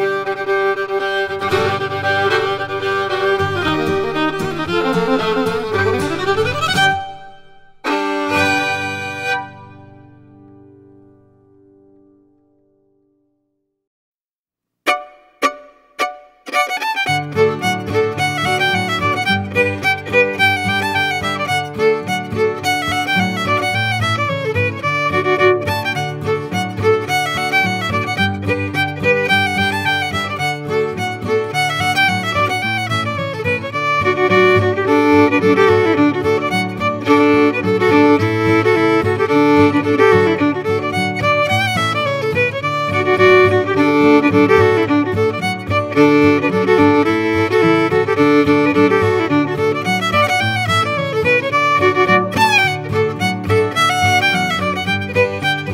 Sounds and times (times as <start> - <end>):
Violin, fiddle: 0.0 - 10.4, 14.9 - 55.7.